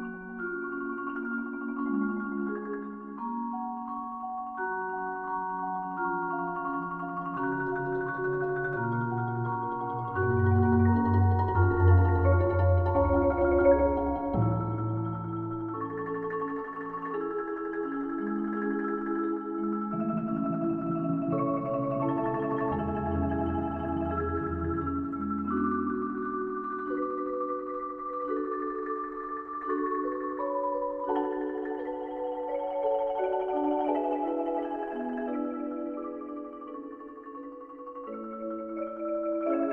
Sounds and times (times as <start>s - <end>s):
Percussion: 0.0s - 39.7s.